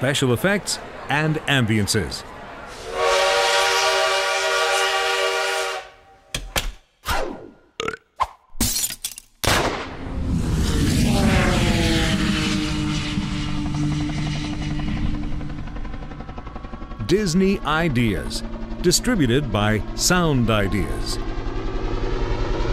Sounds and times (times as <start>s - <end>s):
Sound effect: 7.0s - 7.6s.